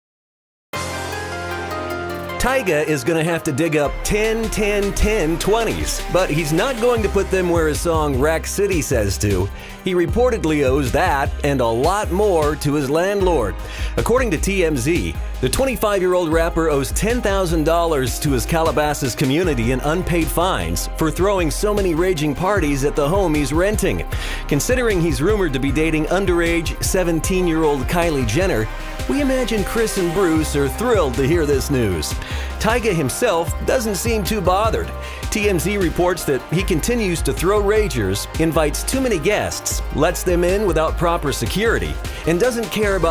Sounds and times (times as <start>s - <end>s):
Music: 0.7s - 43.1s
Speech: 2.4s - 43.1s.